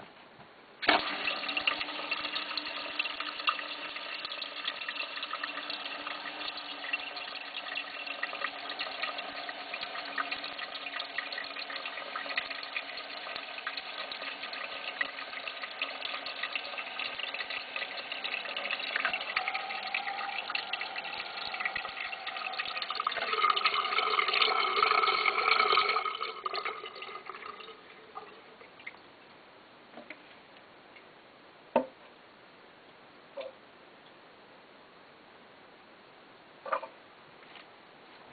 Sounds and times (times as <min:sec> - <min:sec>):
Toilet flush: 0:00.8 - 0:28.9.